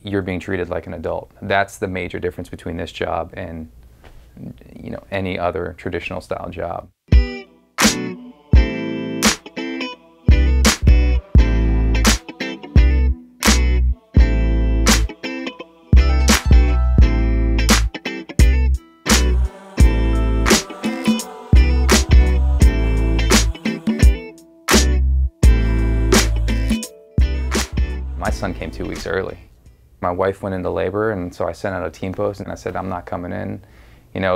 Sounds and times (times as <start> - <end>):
Music: 7.1 - 29.3.